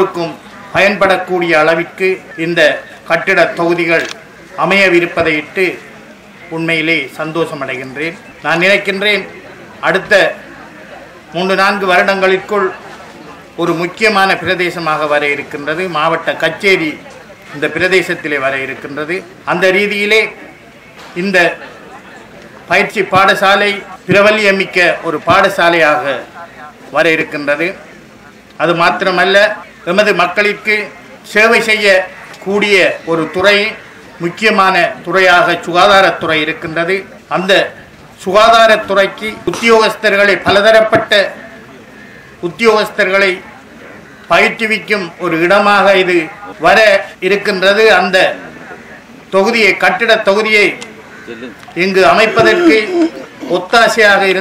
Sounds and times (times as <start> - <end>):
Male speech, man speaking: 0.0 - 5.9, 6.5 - 10.4, 11.3 - 12.8, 13.6 - 17.0, 17.6 - 20.4, 21.2 - 21.6, 22.7 - 27.8, 28.6 - 41.4, 42.4 - 43.4, 44.3 - 48.4, 49.3 - 54.4
Narration, monologue: 0.0 - 54.4.